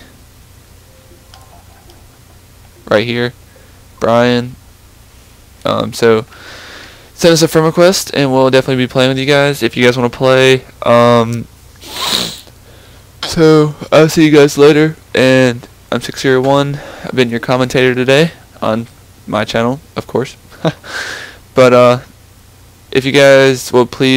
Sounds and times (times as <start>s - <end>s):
Speech: 2.8s - 3.4s, 4.0s - 4.6s, 5.6s - 6.3s, 7.2s - 11.5s, 13.2s - 20.4s, 21.6s - 22.1s, 22.9s - 24.1s.